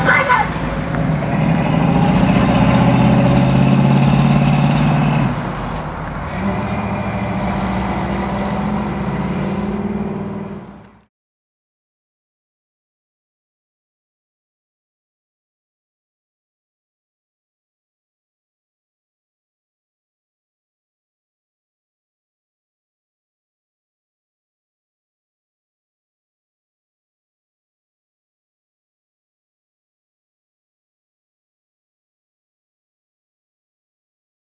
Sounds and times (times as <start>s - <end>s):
Car: 0.0s - 11.1s
Outside, urban or manmade: 0.0s - 11.1s.